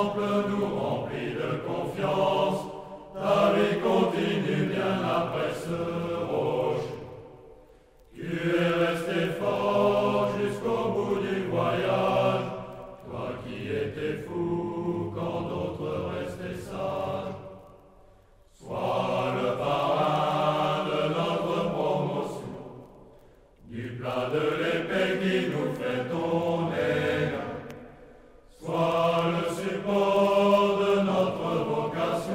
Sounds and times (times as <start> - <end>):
Mantra: 0.0 - 7.4, 8.1 - 17.8, 18.5 - 22.8, 23.6 - 32.3.